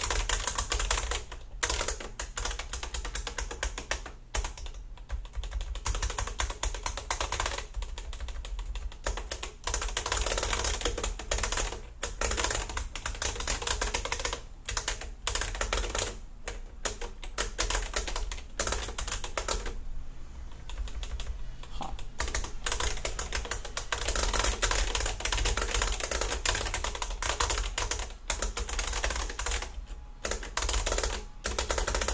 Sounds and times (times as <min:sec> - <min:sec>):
Computer keyboard: 0:00.0 - 0:19.8, 0:20.5 - 0:32.1
Typewriter: 0:00.0 - 0:19.8, 0:20.5 - 0:21.4, 0:22.0 - 0:32.1.